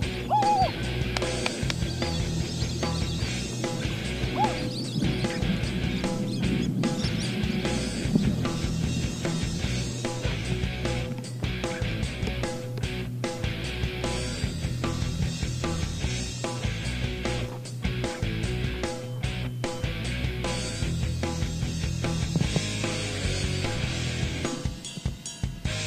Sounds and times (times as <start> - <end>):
Music: 0.0 - 25.8.